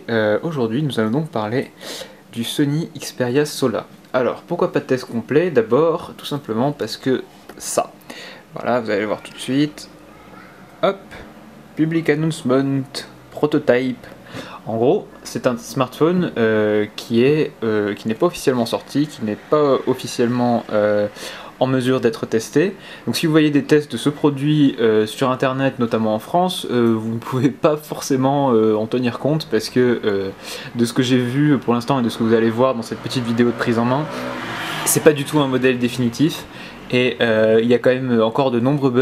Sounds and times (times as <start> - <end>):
Speech: 0.0 - 8.0, 8.6 - 34.2, 34.9 - 39.0.